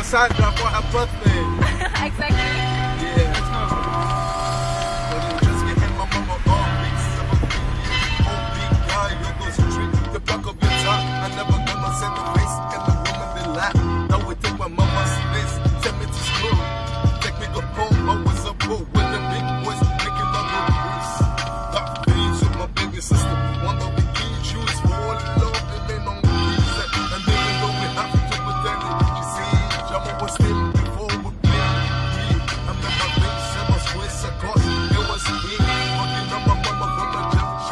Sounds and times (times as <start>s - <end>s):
Male singing: 0.0s - 3.9s, 5.0s - 7.1s, 8.2s - 21.2s, 21.8s - 37.7s
Music: 0.0s - 37.7s.